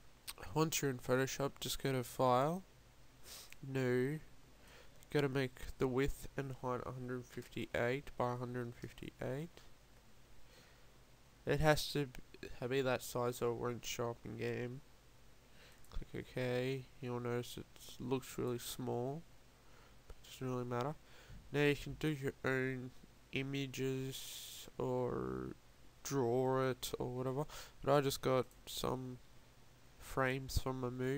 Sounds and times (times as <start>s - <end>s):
Speech: 0.3s - 2.7s, 3.6s - 4.3s, 5.1s - 9.7s, 11.4s - 14.8s, 15.9s - 19.3s, 20.1s - 29.2s, 30.0s - 31.1s.